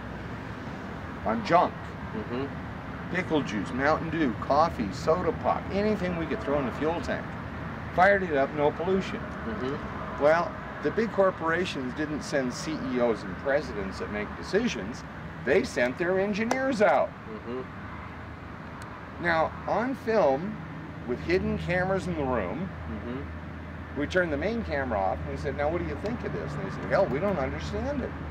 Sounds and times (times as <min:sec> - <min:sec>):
Speech: 0:01.3 - 0:02.5, 0:03.1 - 0:07.2, 0:08.0 - 0:17.7, 0:19.2 - 0:23.3, 0:24.0 - 0:28.2.